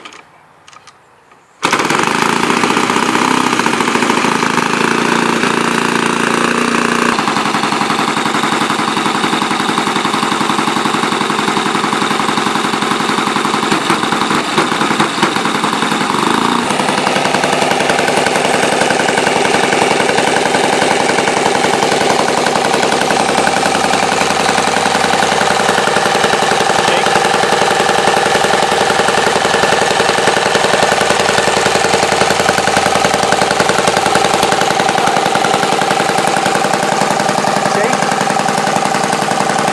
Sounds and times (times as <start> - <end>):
Engine: 0.0 - 39.7
Vehicle: 0.0 - 39.7
Speech: 26.9 - 27.2, 37.7 - 38.1.